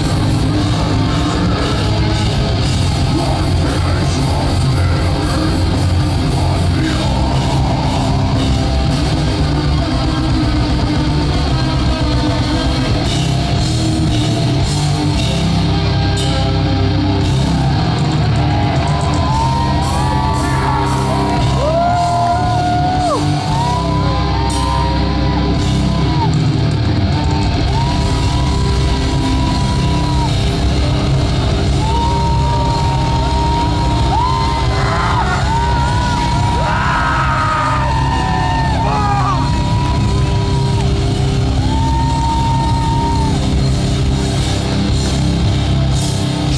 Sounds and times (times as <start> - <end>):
Crowd: 0.0 - 46.5
Heavy metal: 0.0 - 46.5.